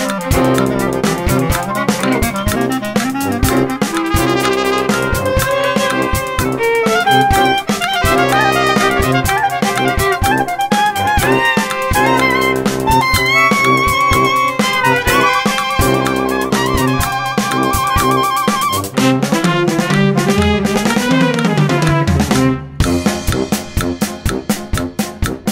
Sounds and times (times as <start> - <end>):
Bass drum: 0.0 - 25.5
Drum kit: 0.0 - 25.5
Snare drum: 0.0 - 25.5.